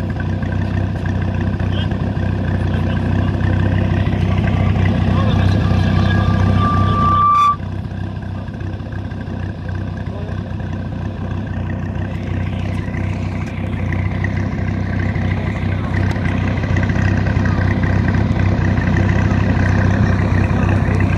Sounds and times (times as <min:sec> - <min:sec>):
Speech: 0:10.0 - 0:10.4.